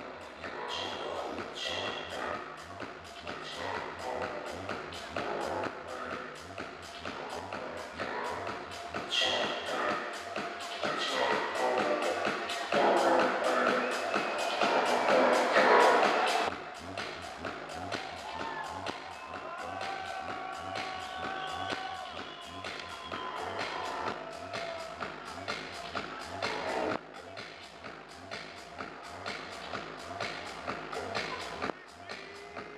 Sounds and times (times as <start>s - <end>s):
Music: 0.0s - 32.7s.